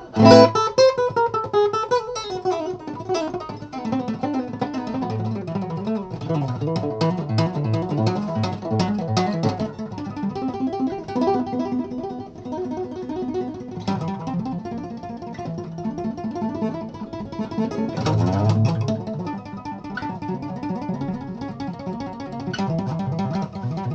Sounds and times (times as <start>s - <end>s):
Plucked string instrument: 0.0s - 23.9s.